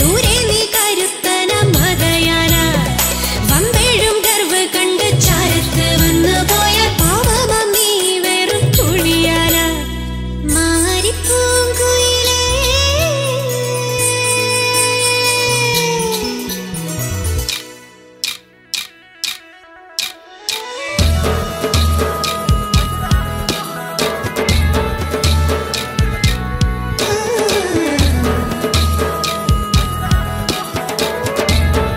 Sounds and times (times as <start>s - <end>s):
Singing: 0.0s - 9.9s, 25.2s - 31.9s
Music: 0.0s - 31.9s.